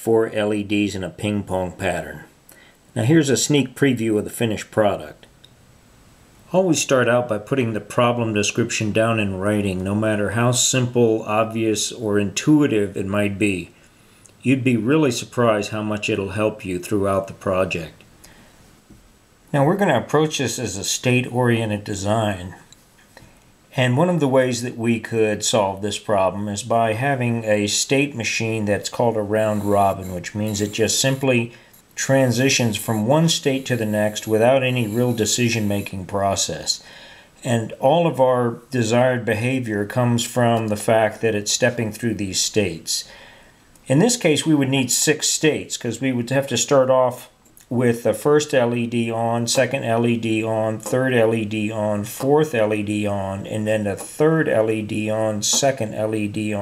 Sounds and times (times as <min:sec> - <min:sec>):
Speech: 0:00.0 - 0:02.4, 0:03.0 - 0:05.3, 0:06.5 - 0:13.8, 0:14.4 - 0:18.0, 0:19.5 - 0:22.7, 0:23.7 - 0:43.1, 0:43.8 - 0:56.6.